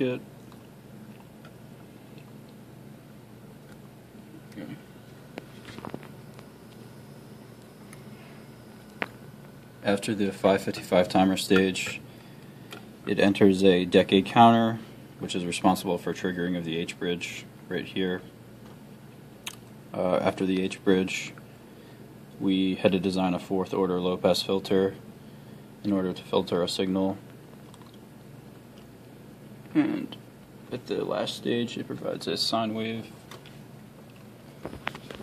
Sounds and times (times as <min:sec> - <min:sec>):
Speech: 0:00.0 - 0:00.3, 0:04.5 - 0:04.8, 0:09.8 - 0:12.0, 0:13.1 - 0:18.3, 0:19.9 - 0:21.4, 0:22.4 - 0:25.0, 0:25.8 - 0:27.2, 0:29.8 - 0:33.2.